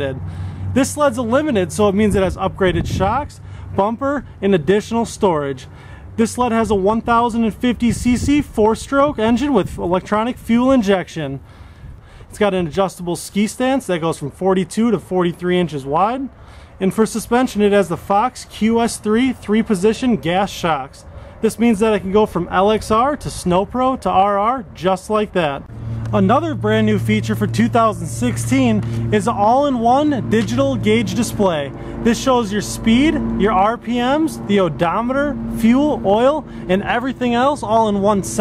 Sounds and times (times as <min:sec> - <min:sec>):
Speech: 0:00.0 - 0:11.4, 0:12.3 - 0:38.4.